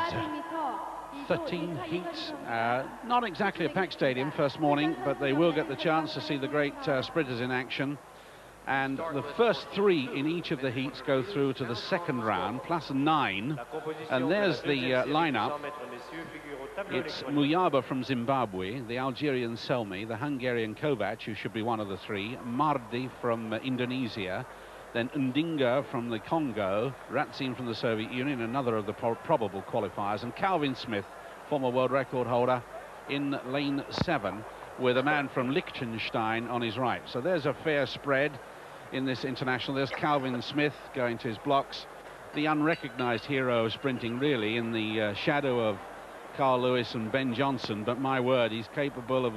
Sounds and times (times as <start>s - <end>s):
Speech: 0.0s - 8.0s, 8.7s - 45.8s, 46.4s - 49.3s.